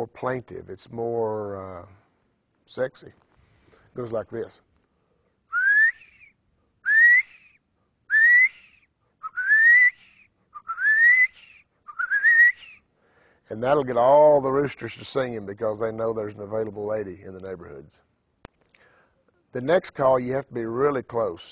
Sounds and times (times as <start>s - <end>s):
Male speech, man speaking: 0.0s - 2.0s, 2.7s - 3.2s, 4.0s - 4.6s, 13.5s - 18.0s, 19.6s - 21.5s.